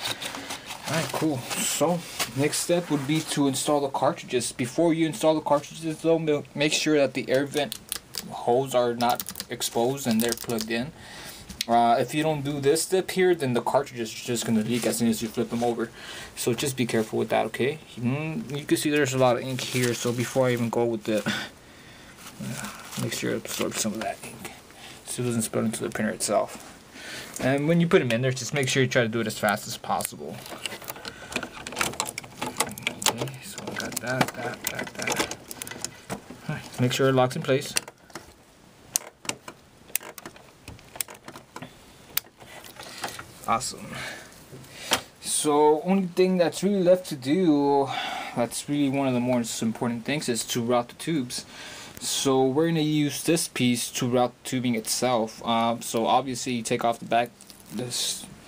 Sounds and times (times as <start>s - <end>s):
Speech: 0.8s - 11.0s, 11.6s - 21.5s, 22.4s - 26.6s, 27.4s - 30.5s, 32.7s - 35.3s, 36.4s - 37.8s, 43.4s - 44.2s, 45.2s - 58.4s.